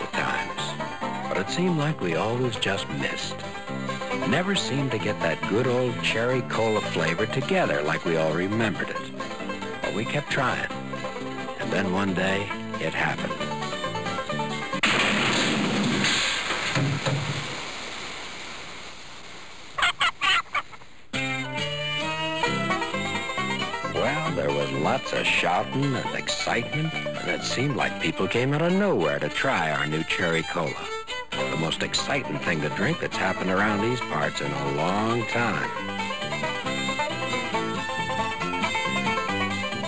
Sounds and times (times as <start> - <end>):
Speech: 0.0 - 3.4, 4.2 - 9.1, 9.8 - 10.7, 11.6 - 13.5, 23.9 - 35.8
Music: 0.0 - 14.9, 21.1 - 39.8.